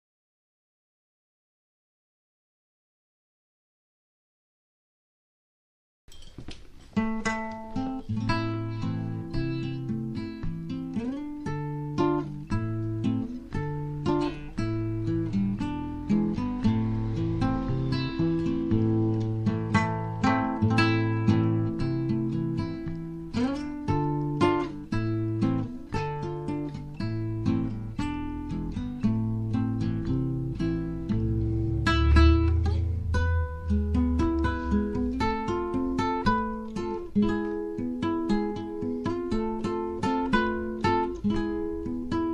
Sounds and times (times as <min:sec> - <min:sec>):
Acoustic guitar: 0:06.1 - 0:42.3
Strum: 0:06.1 - 0:42.3.